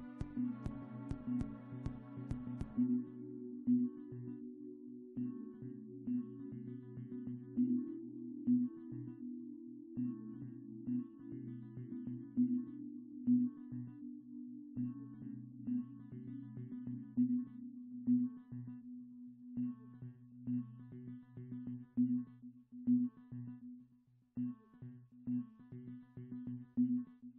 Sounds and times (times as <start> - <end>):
Music: 0.0 - 27.3.